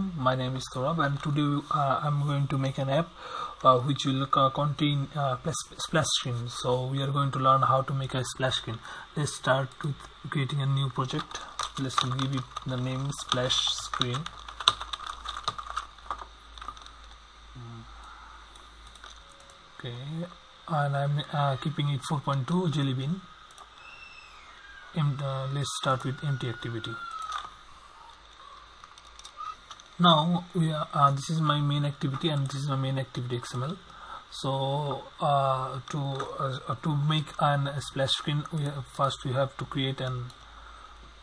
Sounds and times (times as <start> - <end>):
Speech: 0.0 - 14.4, 17.6 - 17.9, 19.8 - 23.3, 25.0 - 27.1, 30.0 - 40.4.